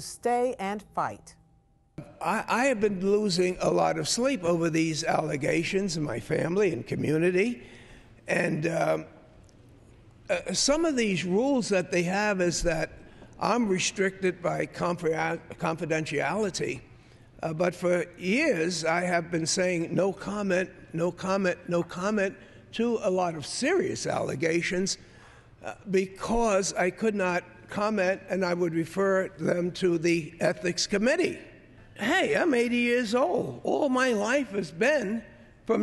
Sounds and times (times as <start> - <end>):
Speech: 0.0 - 1.3, 2.0 - 7.6, 8.3 - 9.1, 10.3 - 25.0, 25.6 - 35.8.